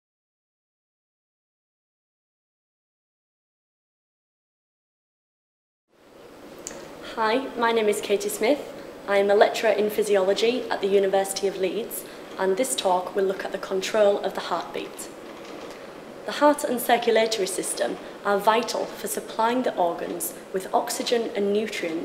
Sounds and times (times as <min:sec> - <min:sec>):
Speech: 0:07.1 - 0:15.2, 0:16.3 - 0:22.0.